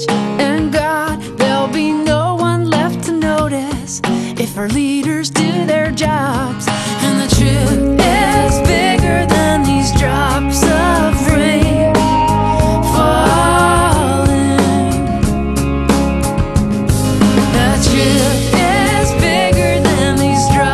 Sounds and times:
Jazz: 5.1 - 20.7
Tender music: 6.8 - 20.7.

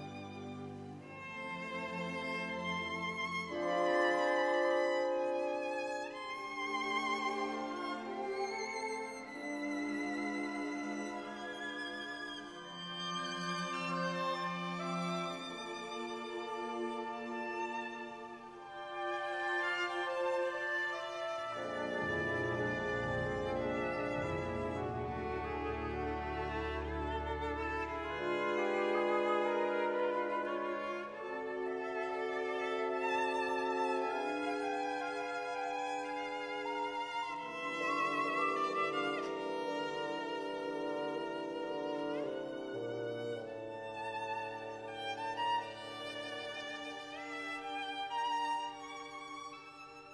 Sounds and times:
Violin, fiddle: 0.0 - 50.1.

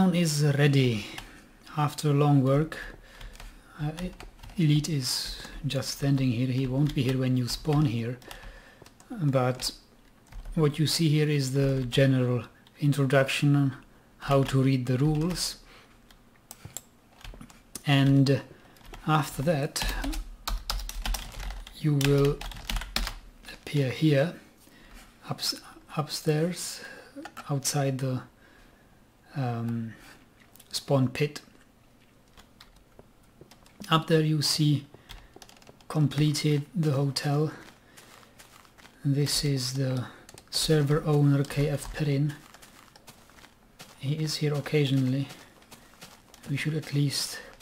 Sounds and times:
Computer keyboard: 3.1 - 10.6, 14.4 - 15.4, 16.1 - 19.1, 19.8 - 23.2, 32.3 - 34.0, 35.1 - 39.4, 40.0 - 44.0.

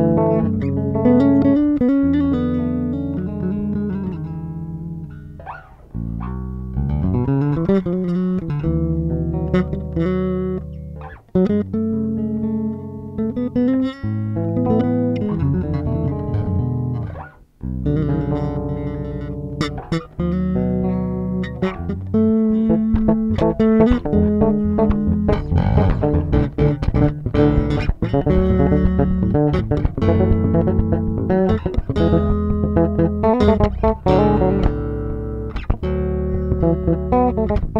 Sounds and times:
Bass guitar: 0.0 - 37.7
Inside, small room: 0.0 - 37.7.

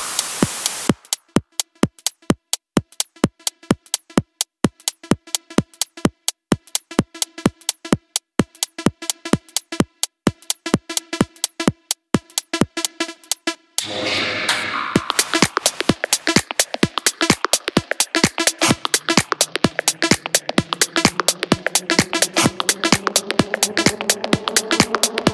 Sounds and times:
Drum machine: 0.0 - 25.3.

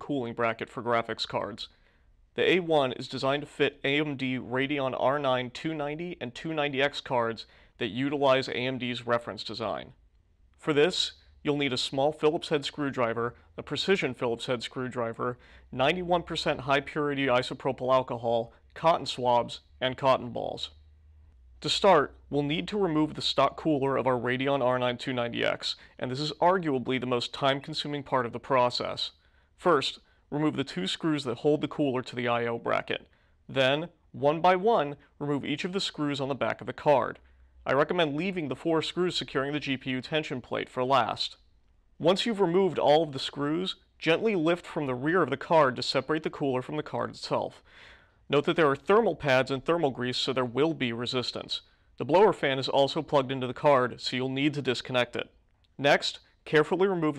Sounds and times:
Speech: 0.0 - 1.7, 2.4 - 10.0, 10.6 - 20.8, 21.6 - 41.4, 42.0 - 47.7, 48.3 - 57.1.

